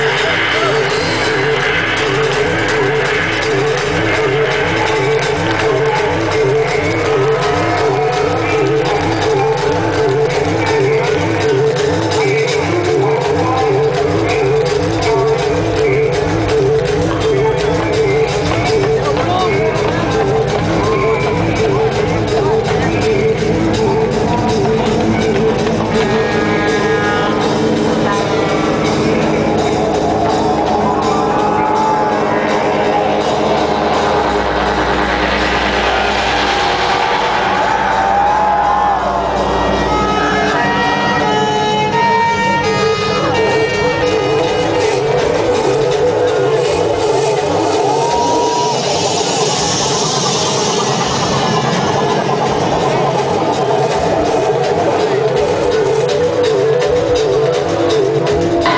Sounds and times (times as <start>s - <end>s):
Music: 0.0s - 58.7s
Speech: 18.7s - 20.4s.